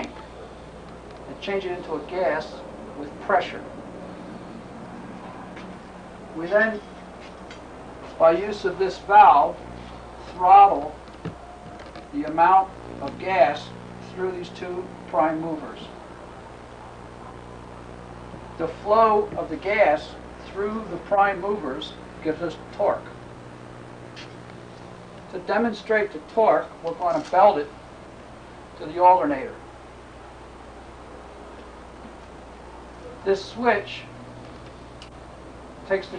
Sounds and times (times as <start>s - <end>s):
Speech: 1.3s - 3.7s, 6.4s - 6.8s, 8.2s - 9.6s, 10.2s - 11.0s, 12.1s - 16.0s, 18.6s - 23.2s, 25.3s - 27.7s, 28.8s - 29.6s, 33.2s - 34.1s, 35.9s - 36.1s.